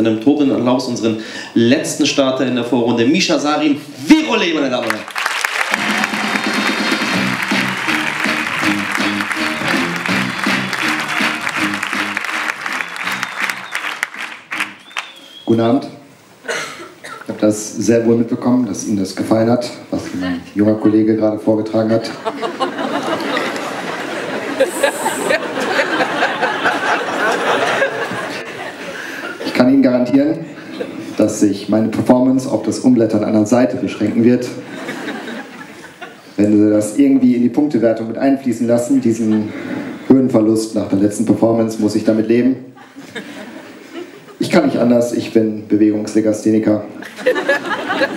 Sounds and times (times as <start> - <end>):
Speech: 0.0 - 5.1, 15.5 - 16.0, 17.3 - 22.2, 29.5 - 30.5, 31.2 - 34.6, 36.4 - 39.5, 40.1 - 42.7, 44.4 - 47.0.